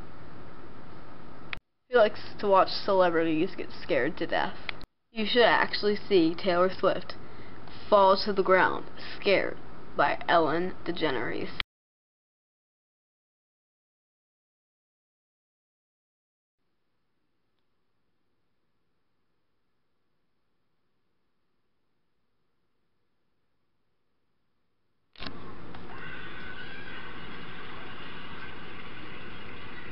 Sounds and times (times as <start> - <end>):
Silence: 17.1 - 29.9.